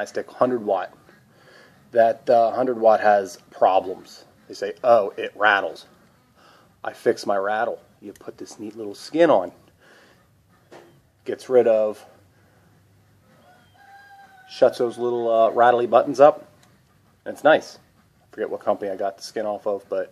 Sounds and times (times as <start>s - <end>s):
Male speech, man speaking: 0.0s - 1.0s, 1.9s - 5.9s, 6.8s - 9.6s, 11.3s - 12.2s, 14.5s - 16.5s, 17.3s - 17.8s, 18.4s - 20.1s.